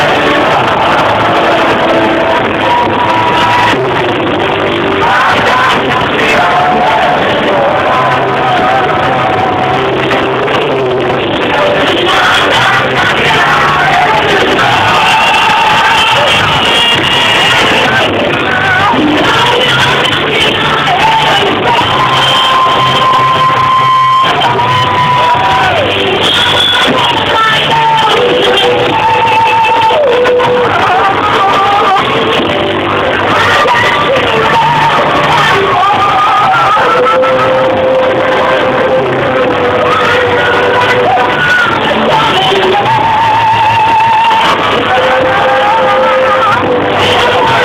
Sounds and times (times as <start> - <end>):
Inside, large room or hall: 0.0 - 47.6
Music: 0.0 - 47.6
Singing: 0.0 - 47.6.